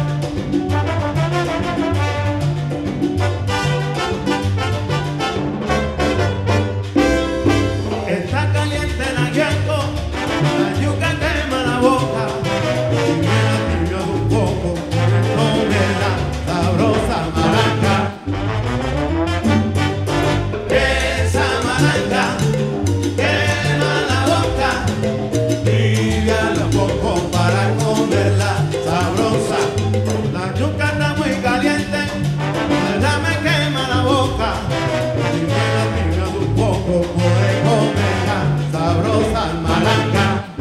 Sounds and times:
Independent music: 0.0s - 40.6s.

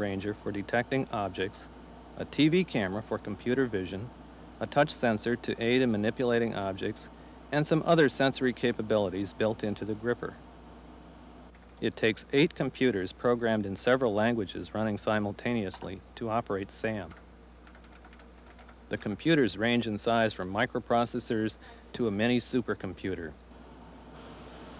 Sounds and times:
Male speech, man speaking: 0.0s - 10.4s, 11.8s - 17.2s, 18.9s - 23.4s
Narration, monologue: 0.0s - 24.0s.

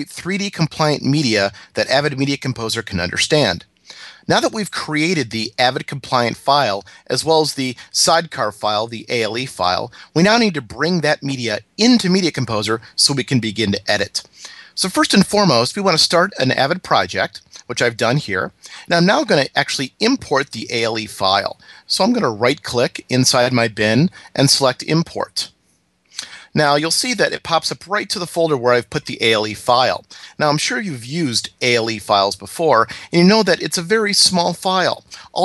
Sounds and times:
Speech: 0.0s - 25.5s, 26.2s - 35.4s.

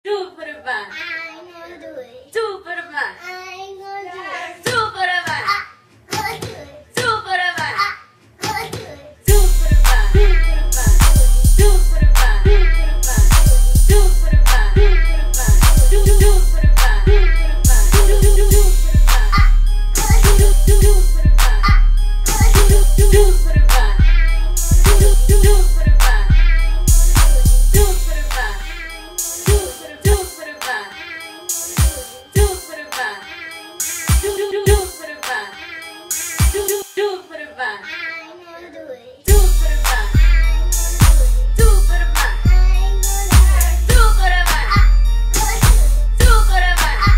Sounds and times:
Speech: 0.0s - 9.2s
Music: 9.2s - 37.6s, 39.3s - 47.1s.

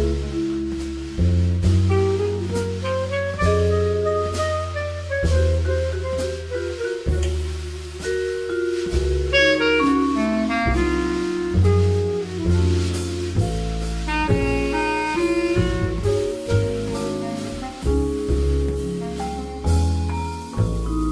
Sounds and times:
Bass drum: 0.0s - 21.1s
Drum kit: 0.0s - 21.1s
Rimshot: 4.3s - 10.0s.

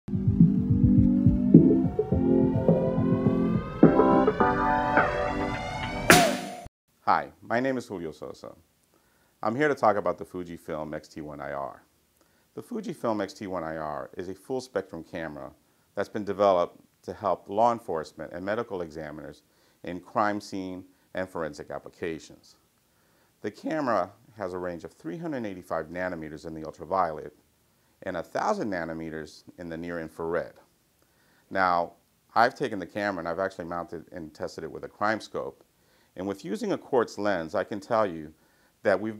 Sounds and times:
Music: 0.1s - 6.7s
Speech: 7.0s - 8.6s, 9.4s - 11.9s, 12.6s - 22.6s, 23.4s - 27.4s, 28.0s - 30.7s, 31.5s - 35.6s, 36.2s - 39.1s.

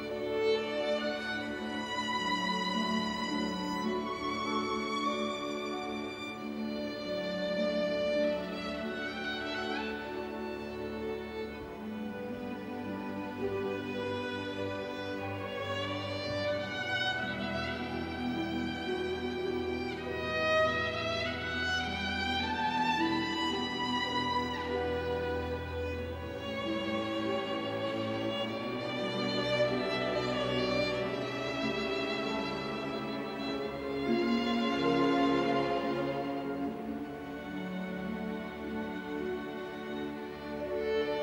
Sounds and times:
Violin, fiddle: 0.0s - 41.2s.

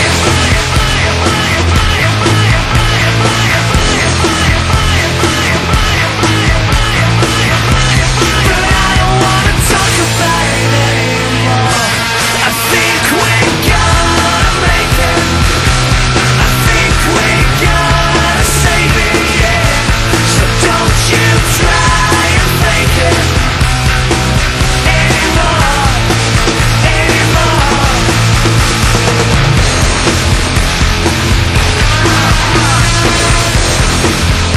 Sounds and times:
Music: 0.0s - 34.5s.

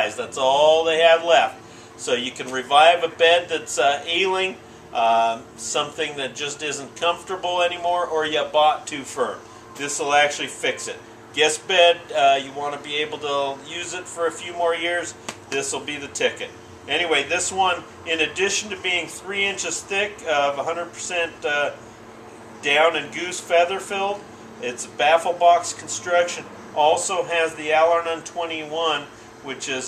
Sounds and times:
Speech: 0.0s - 21.8s, 22.6s - 29.8s.

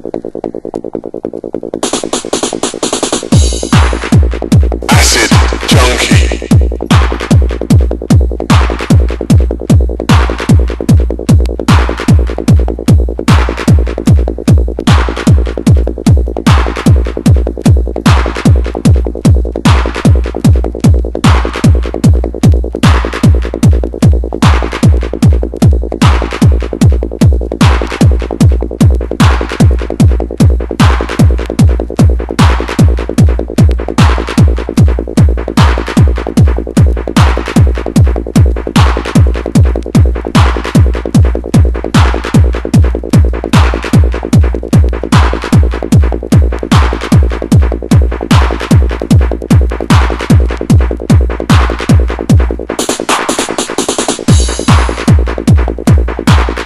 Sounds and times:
Techno: 0.0s - 56.6s.

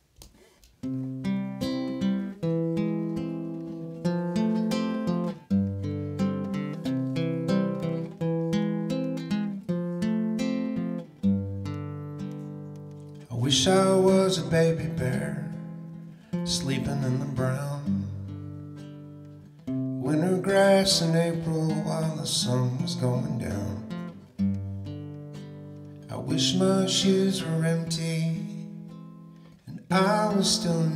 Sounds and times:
Music: 0.0s - 30.9s.

